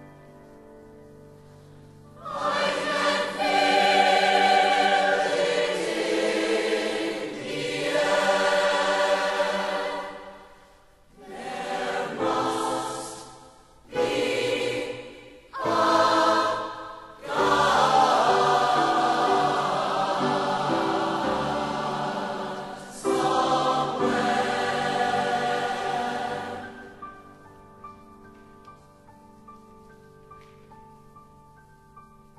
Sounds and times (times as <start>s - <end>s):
Soul music: 0.0s - 10.4s, 11.2s - 31.6s.